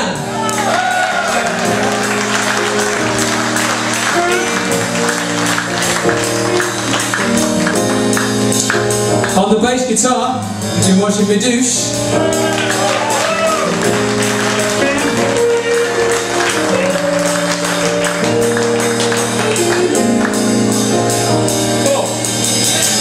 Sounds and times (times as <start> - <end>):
Music: 0.0 - 23.0
Speech: 9.4 - 11.9.